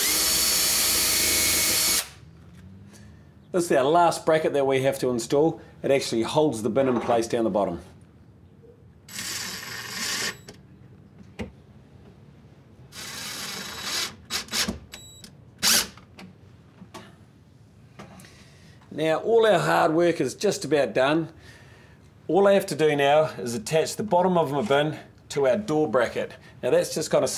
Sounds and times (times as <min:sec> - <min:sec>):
Speech: 0:03.5 - 0:08.0, 0:18.9 - 0:21.4, 0:22.3 - 0:27.3.